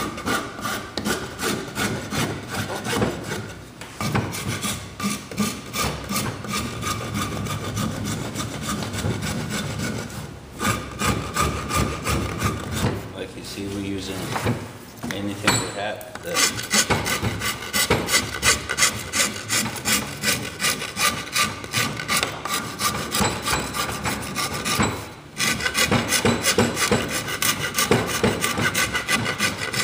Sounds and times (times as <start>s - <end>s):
Speech: 13.2s - 14.4s, 15.0s - 16.5s.